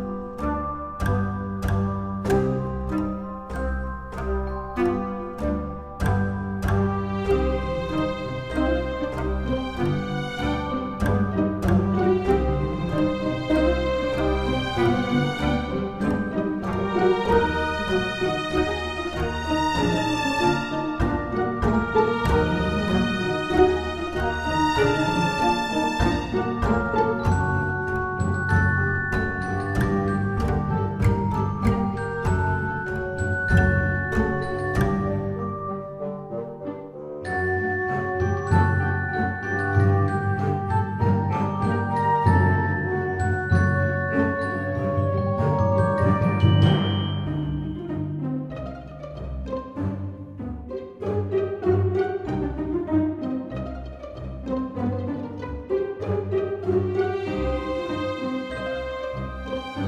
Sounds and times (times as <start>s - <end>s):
Music: 0.0s - 59.8s.